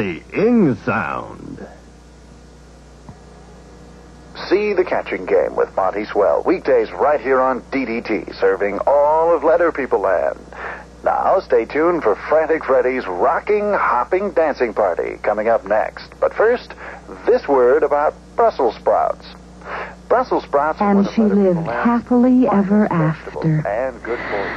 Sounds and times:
Speech: 0.0 - 1.8, 4.4 - 19.4, 20.1 - 24.5.

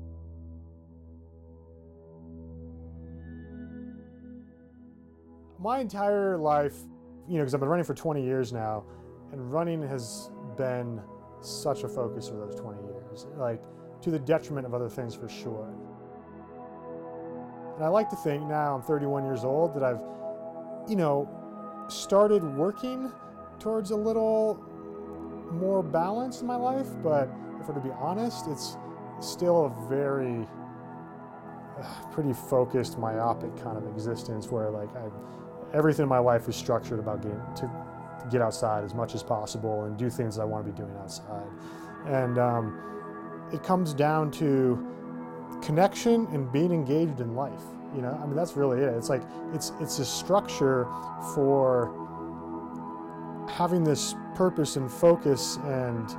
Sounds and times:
Music: 0.0 - 56.1
Speech: 5.6 - 15.8, 17.8 - 20.0, 20.9 - 21.3, 21.9 - 24.6, 25.5 - 30.5, 31.8 - 42.7, 43.5 - 44.8, 45.6 - 51.9, 53.5 - 56.1.

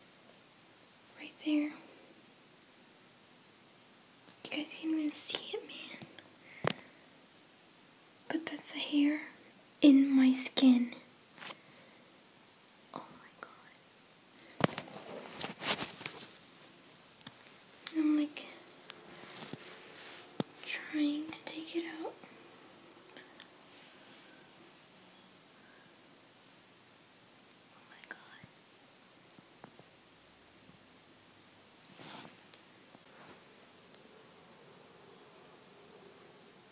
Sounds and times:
Whispering: 1.1 - 2.0, 4.4 - 6.2, 8.3 - 11.1, 12.9 - 13.9, 17.9 - 18.7, 19.6 - 22.4, 27.7 - 28.6.

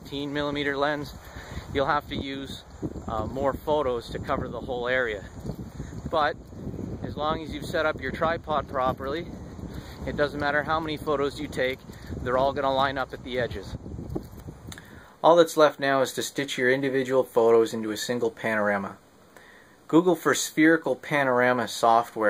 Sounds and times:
Speech: 0.0 - 5.3, 6.1 - 6.4, 7.0 - 9.3, 10.0 - 13.8, 15.2 - 19.0, 19.9 - 22.2.

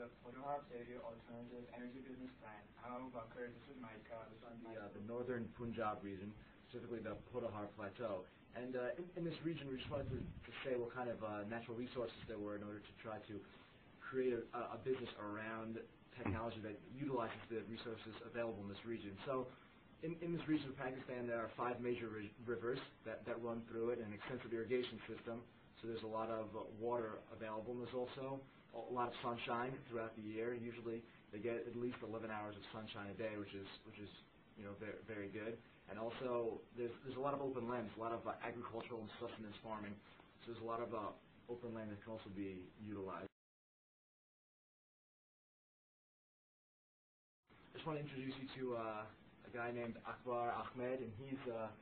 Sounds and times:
Speech: 0.0 - 43.4, 47.7 - 51.8.

